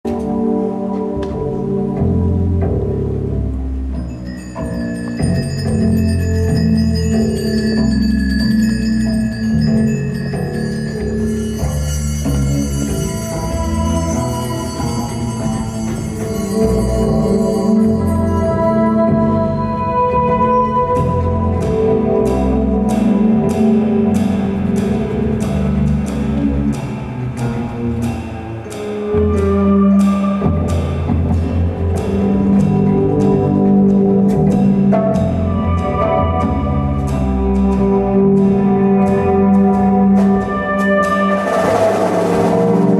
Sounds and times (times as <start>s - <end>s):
Marimba, xylophone: 3.7s - 42.9s
Glockenspiel: 3.9s - 21.6s.